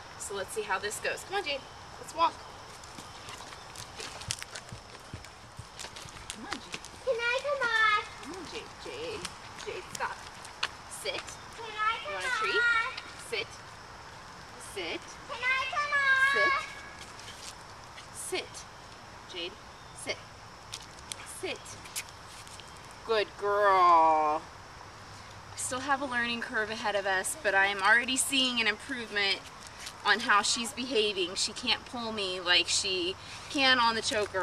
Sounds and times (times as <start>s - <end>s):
Speech: 0.2s - 2.4s, 14.6s - 16.7s, 30.1s - 34.4s.